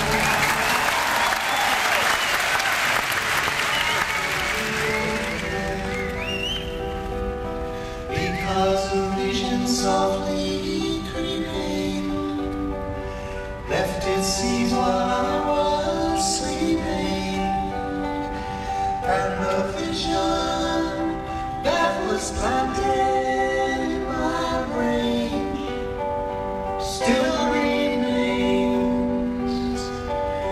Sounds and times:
Music: 0.0s - 30.5s.

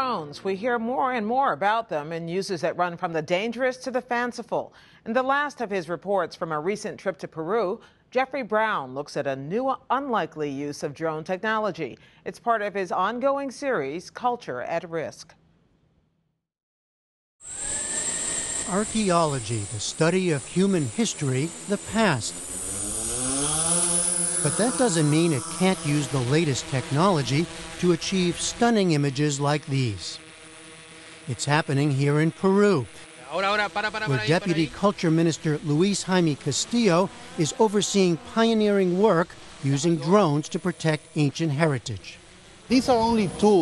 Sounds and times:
Speech: 31.3s - 43.6s.

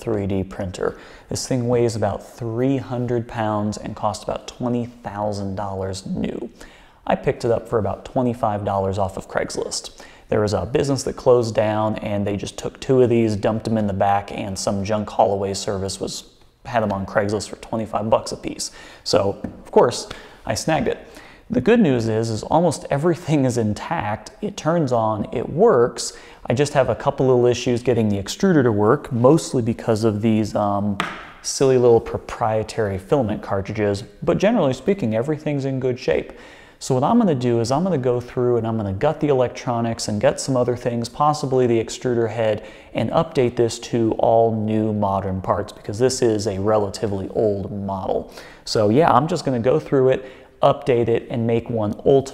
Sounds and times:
Speech: 0.0s - 52.3s.

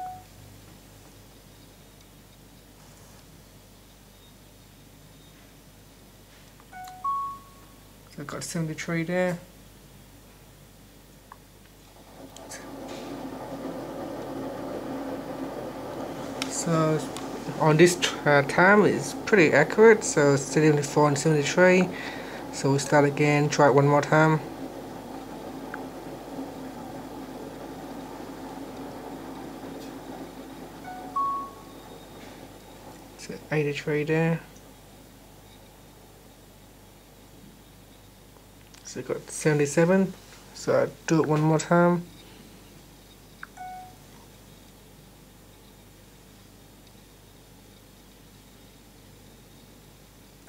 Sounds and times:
Speech: 8.1s - 9.5s, 16.5s - 24.5s, 33.2s - 34.5s, 38.8s - 42.1s.

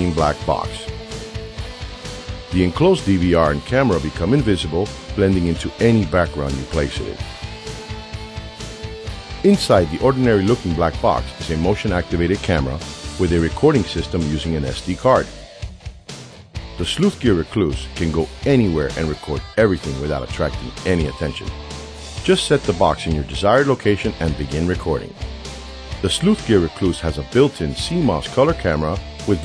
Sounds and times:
Speech: 0.0s - 0.9s, 2.5s - 7.2s, 9.4s - 15.4s, 16.8s - 21.5s, 22.2s - 25.2s, 26.0s - 29.4s
Music: 0.0s - 29.4s.

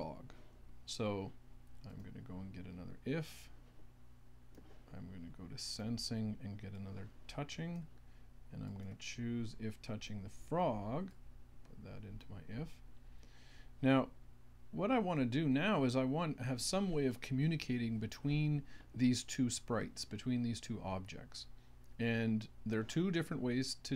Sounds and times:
Speech: 0.0s - 0.3s, 0.9s - 3.6s, 4.9s - 7.9s, 8.5s - 12.8s, 13.8s - 14.2s, 14.8s - 23.9s.

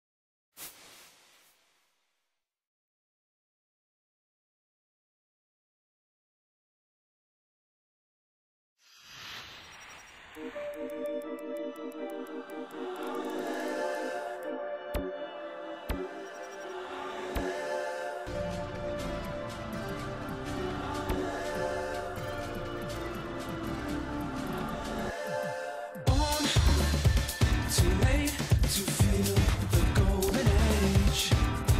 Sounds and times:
Music: 10.4s - 31.7s.

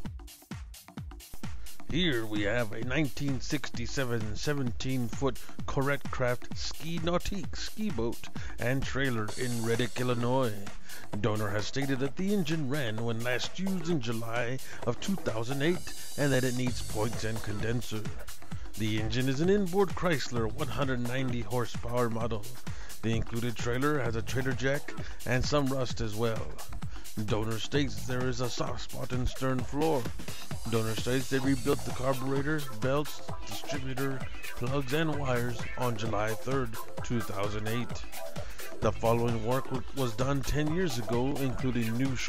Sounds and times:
Music: 0.0s - 42.2s
Speech: 1.9s - 18.2s, 18.8s - 42.2s.

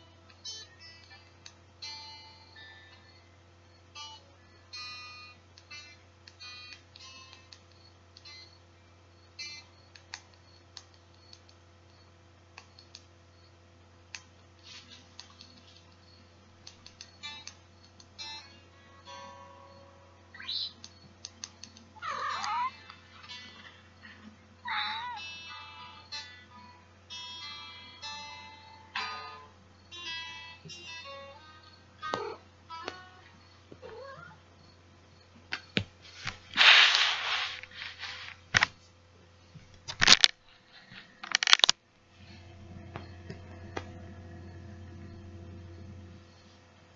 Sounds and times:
Music: 0.0s - 8.6s, 17.0s - 20.4s, 21.7s - 33.6s, 42.2s - 46.5s
Clicking: 9.9s - 12.0s, 12.6s - 13.1s, 16.6s - 18.0s, 20.8s - 21.8s.

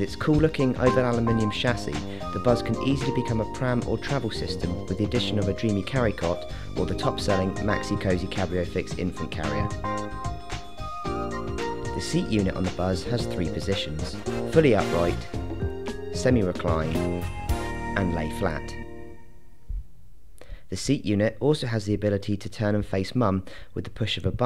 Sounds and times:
Speech: 0.0s - 9.8s, 12.0s - 15.3s, 16.2s - 17.2s, 18.0s - 18.8s, 20.7s - 24.4s
Music: 0.0s - 19.7s.

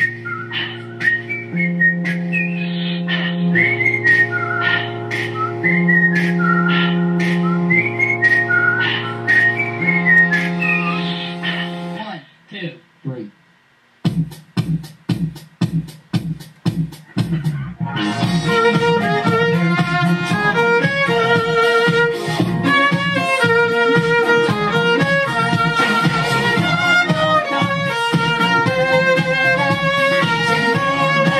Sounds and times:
Music: 0.0s - 12.1s, 14.0s - 31.4s.

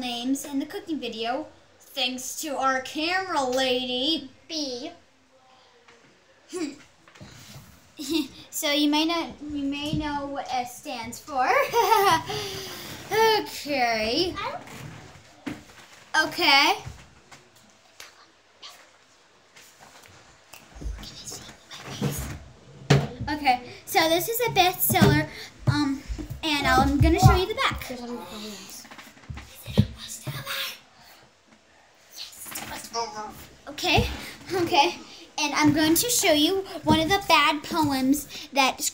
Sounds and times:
Speech: 23.2s - 28.8s, 32.4s - 38.9s.

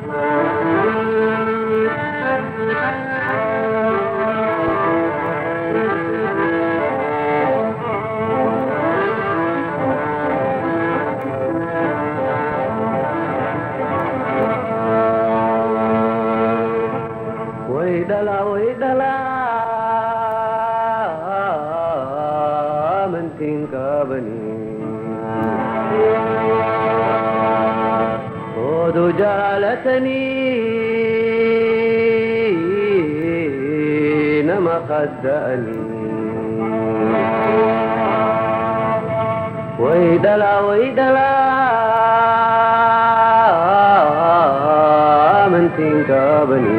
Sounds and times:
Music: 0.0s - 46.7s.

